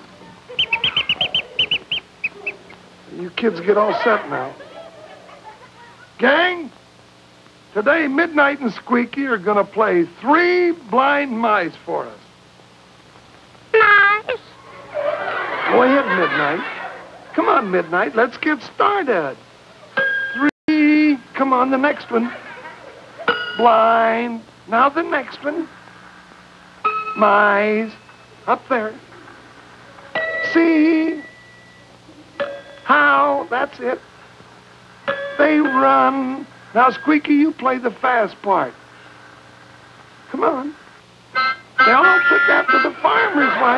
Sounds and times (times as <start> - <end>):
Speech: 3.1 - 4.7, 5.6 - 6.7, 7.8 - 12.2, 15.7 - 16.7, 17.3 - 19.4, 20.4 - 22.4, 23.6 - 25.7, 27.2 - 29.0, 32.9 - 34.0, 35.4 - 38.8, 40.3 - 40.8, 41.9 - 43.7
Music: 19.9 - 20.5, 23.2 - 23.9, 26.8 - 28.5, 29.8 - 33.2, 35.0 - 37.2, 41.3 - 43.7.